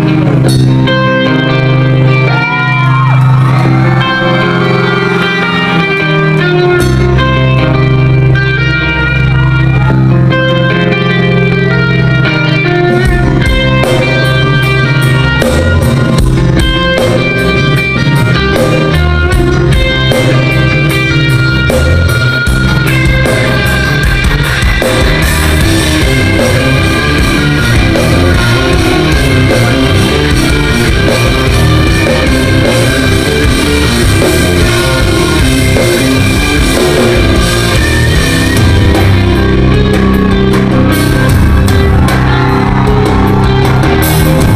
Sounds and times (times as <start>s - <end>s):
Music: 0.0s - 44.5s.